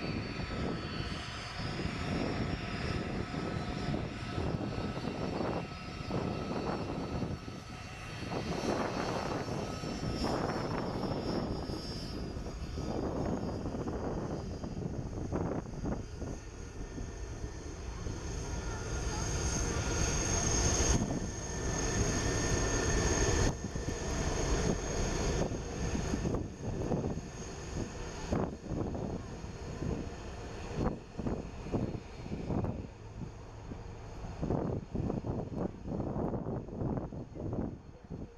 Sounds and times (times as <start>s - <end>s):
Jet engine: 0.0s - 38.3s.